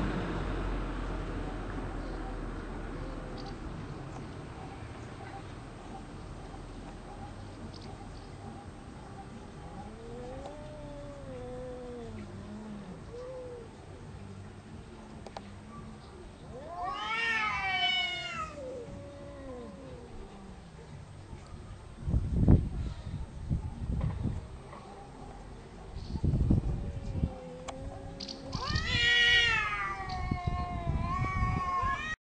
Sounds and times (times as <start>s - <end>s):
Meow: 9.8s - 12.4s, 16.5s - 20.2s, 27.0s - 32.2s.